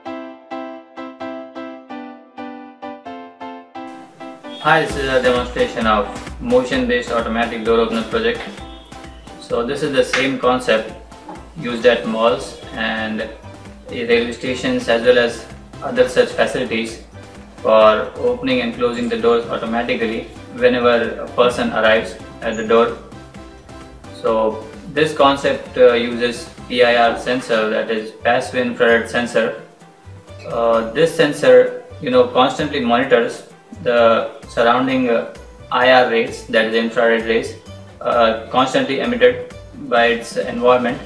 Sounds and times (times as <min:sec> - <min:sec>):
Music: 0:00.0 - 0:41.0.